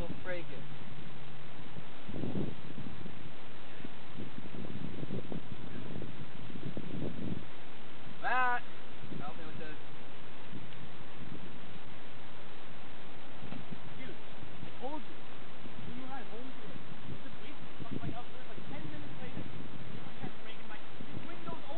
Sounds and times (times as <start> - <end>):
Speech: 0.0 - 0.6, 9.2 - 9.8, 14.8 - 15.1, 15.9 - 16.6, 17.2 - 19.5, 20.2 - 21.7.